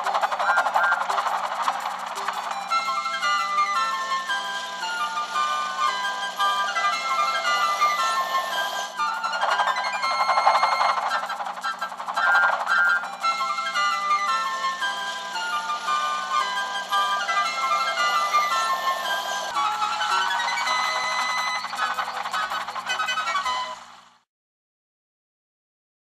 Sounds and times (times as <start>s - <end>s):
Music: 0.0s - 24.3s.